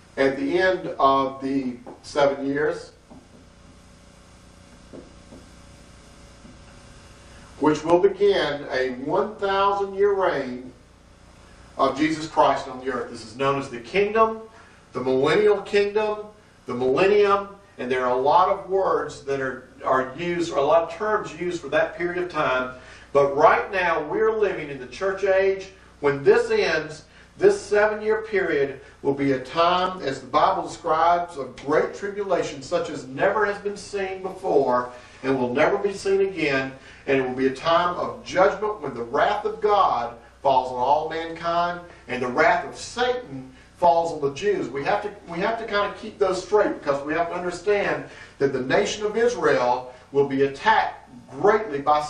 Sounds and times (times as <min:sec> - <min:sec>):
Speech: 0:00.2 - 0:03.0, 0:07.6 - 0:10.8, 0:11.8 - 0:52.0.